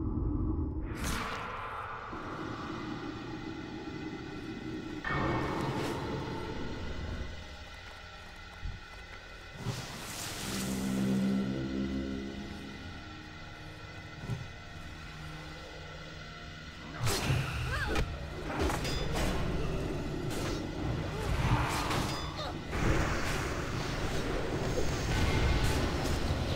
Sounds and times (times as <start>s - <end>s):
Music: 0.8s - 26.5s.